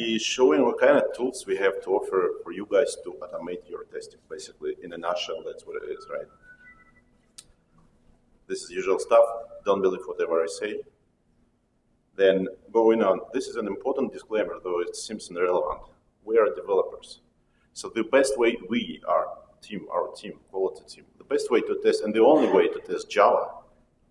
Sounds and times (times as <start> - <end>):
Speech: 0.0 - 6.3, 8.5 - 10.9, 12.2 - 17.2, 17.8 - 23.6.